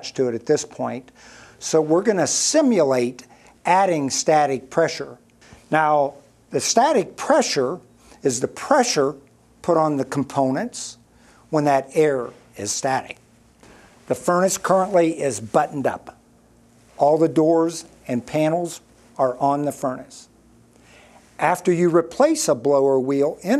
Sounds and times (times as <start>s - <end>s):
Speech: 0.0s - 13.2s, 14.1s - 16.2s, 17.0s - 20.3s, 21.4s - 23.6s.